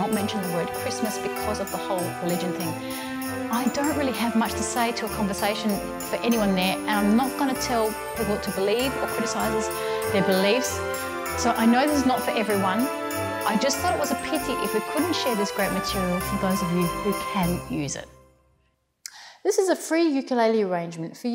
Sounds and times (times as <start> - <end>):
Speech: 0.0 - 2.8, 3.5 - 10.8, 11.4 - 12.9, 13.5 - 18.1, 19.4 - 21.3.